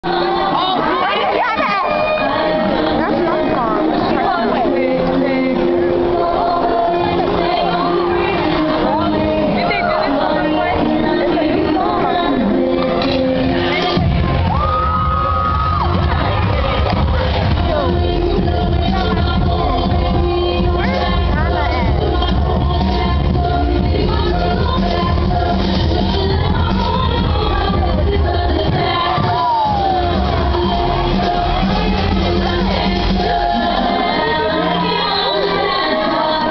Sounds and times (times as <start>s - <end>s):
Music: 0.0s - 36.5s
Speech: 0.5s - 5.8s, 7.8s - 13.0s, 20.4s - 22.4s.